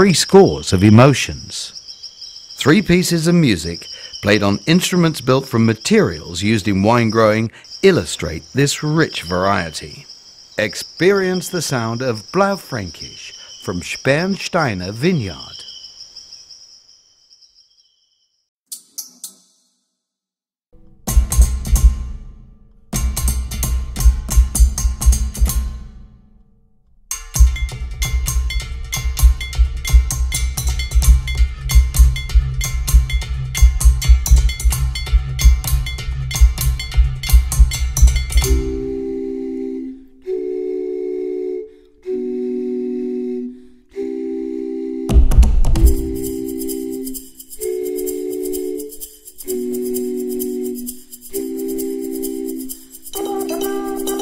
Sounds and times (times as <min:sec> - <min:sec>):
Music: 0:20.8 - 0:40.2, 0:43.9 - 0:54.2.